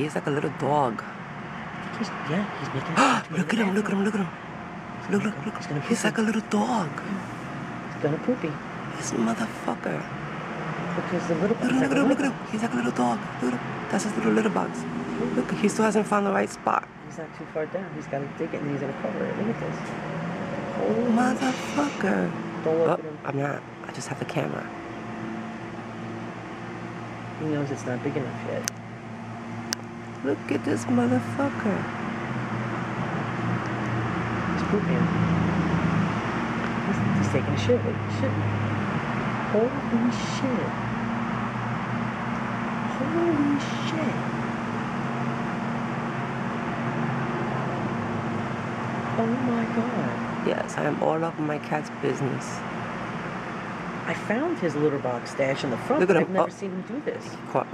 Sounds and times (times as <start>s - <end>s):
Speech: 1.9s - 4.3s, 10.9s - 19.9s, 20.8s - 24.7s, 27.4s - 28.7s, 39.5s - 40.8s, 54.1s - 57.7s.